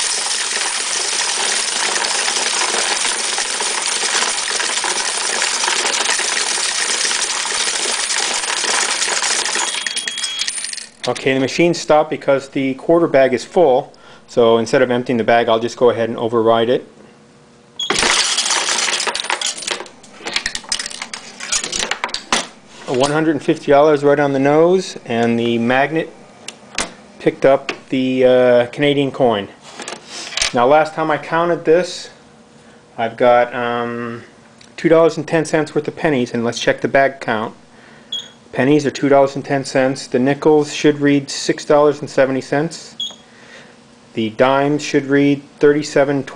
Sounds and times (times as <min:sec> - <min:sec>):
Coin (dropping): 0:00.0 - 0:04.3, 0:05.6 - 0:11.2, 0:17.8 - 0:21.8.